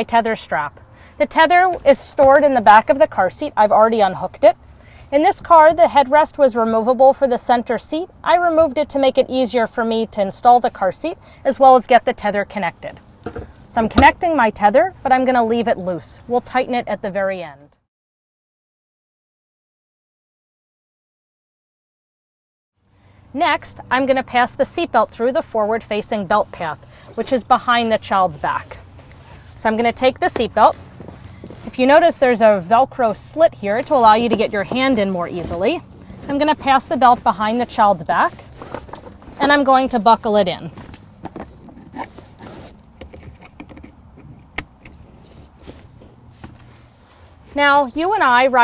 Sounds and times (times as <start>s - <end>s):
Speech: 0.0s - 13.0s, 13.7s - 17.8s, 23.4s - 28.8s, 29.6s - 30.8s, 31.7s - 38.4s, 39.4s - 40.8s, 47.6s - 48.6s.